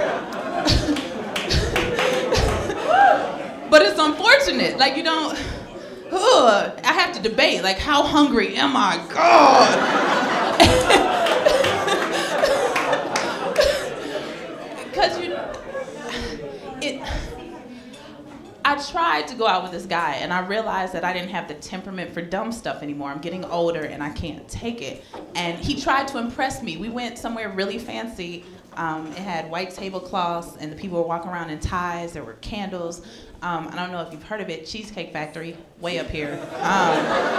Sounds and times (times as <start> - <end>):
Speech: 6.1 - 9.8, 16.8 - 37.2.